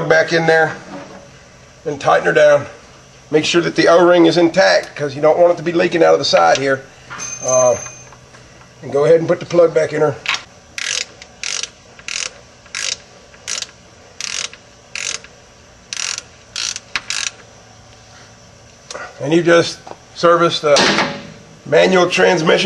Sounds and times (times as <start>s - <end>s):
Speech: 0.0s - 0.8s, 1.9s - 6.8s, 8.8s - 10.2s, 19.2s - 20.9s, 21.7s - 22.6s.